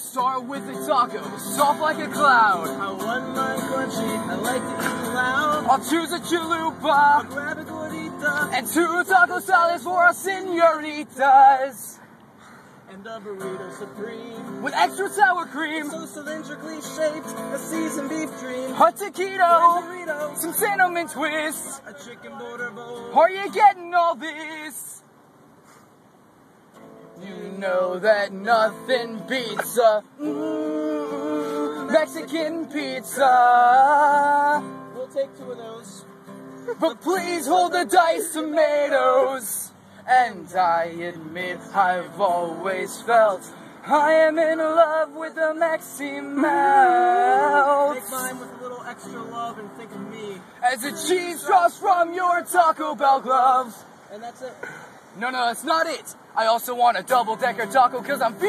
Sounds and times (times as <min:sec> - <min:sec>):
Music: 0:00.6 - 0:09.4, 0:13.4 - 0:21.8, 0:34.2 - 0:38.0, 0:46.6 - 0:51.4.